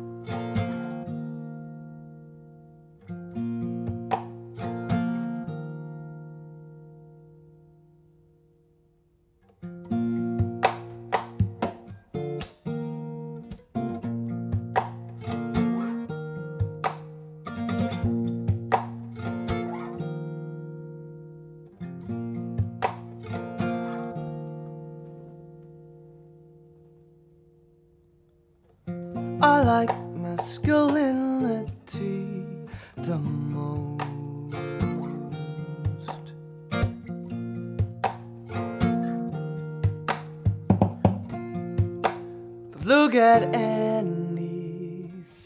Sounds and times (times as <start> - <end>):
Acoustic guitar: 0.0 - 45.4.